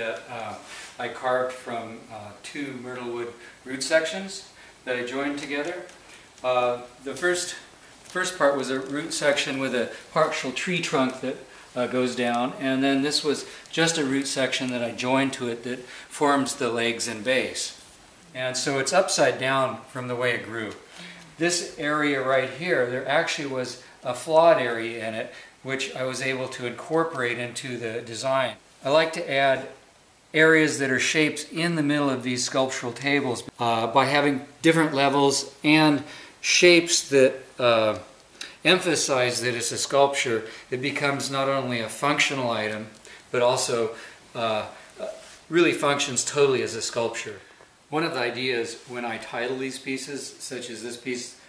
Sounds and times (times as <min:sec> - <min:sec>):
Speech: 0:00.0 - 0:51.4.